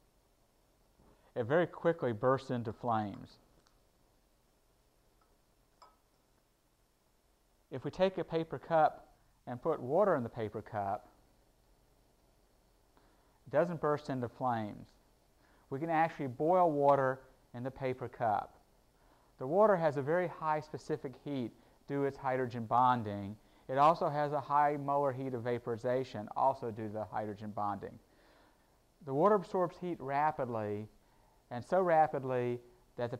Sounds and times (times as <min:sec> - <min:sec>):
Speech: 0:01.4 - 0:03.4, 0:07.7 - 0:11.2, 0:13.5 - 0:15.0, 0:15.7 - 0:18.6, 0:19.4 - 0:28.0, 0:29.0 - 0:33.1.